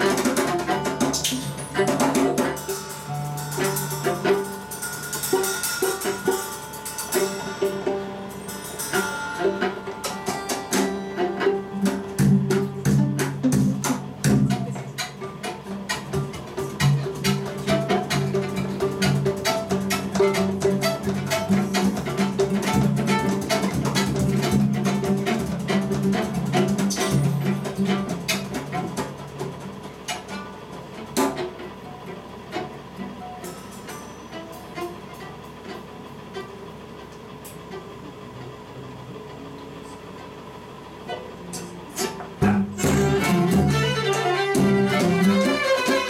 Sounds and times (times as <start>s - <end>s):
Drum: 0.0s - 32.1s, 41.6s - 46.0s
Guitar: 0.0s - 40.3s, 41.1s - 46.0s
Violin, fiddle: 9.2s - 13.2s, 30.2s - 36.8s, 42.0s - 46.0s.